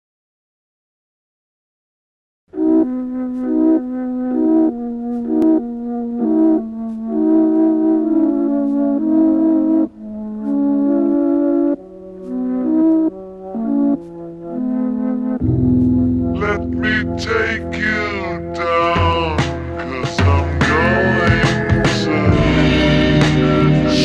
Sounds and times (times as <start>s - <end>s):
Music: 2.5s - 24.0s.